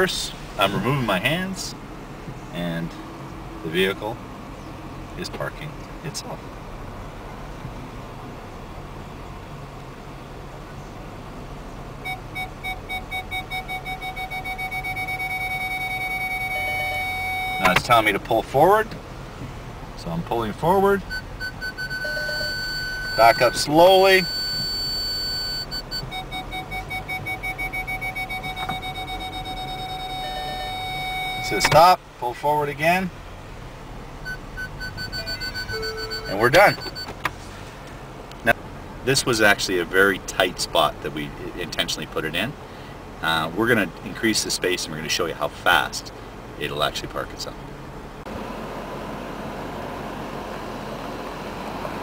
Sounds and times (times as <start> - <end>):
Speech: 0.0 - 1.8, 2.5 - 3.0, 3.6 - 4.2, 5.2 - 6.4, 17.6 - 19.0, 20.0 - 21.1, 23.2 - 24.3, 31.5 - 33.2, 36.3 - 36.8, 38.4 - 42.6, 43.2 - 47.6
Car: 0.0 - 52.0.